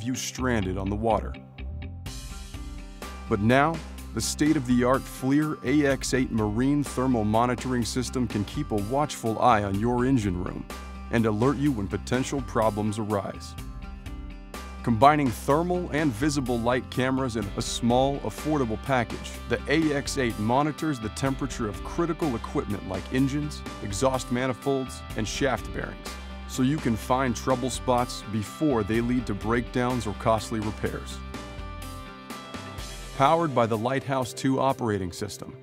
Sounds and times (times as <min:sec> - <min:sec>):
Speech: 0:00.0 - 0:01.4, 0:03.3 - 0:13.6, 0:14.9 - 0:31.2, 0:33.2 - 0:35.6
Music: 0:00.0 - 0:35.6.